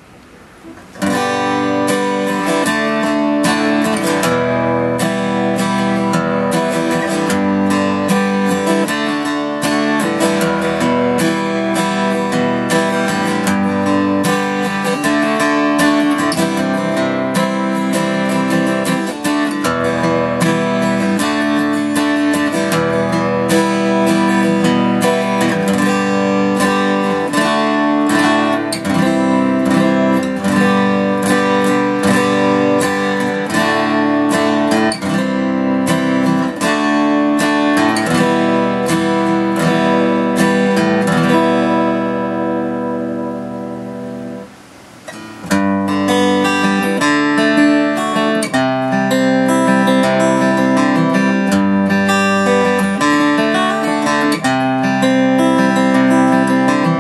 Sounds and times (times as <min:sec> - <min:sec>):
Strum: 0:00.0 - 0:57.0.